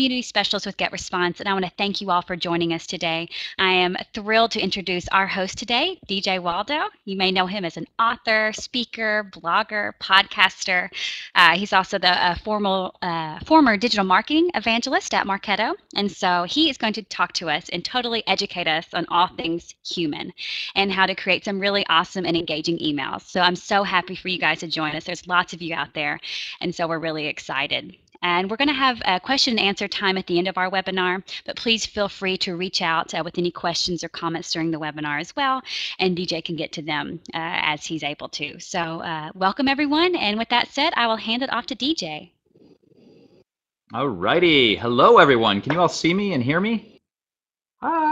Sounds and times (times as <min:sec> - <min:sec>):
Speech: 0:00.0 - 0:42.3, 0:43.9 - 0:46.9, 0:47.8 - 0:48.1.